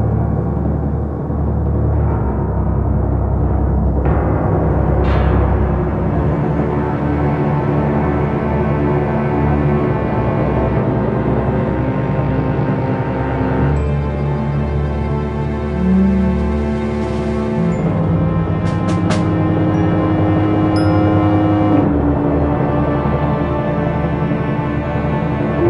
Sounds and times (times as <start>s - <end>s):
Theme music: 13.6s - 25.7s.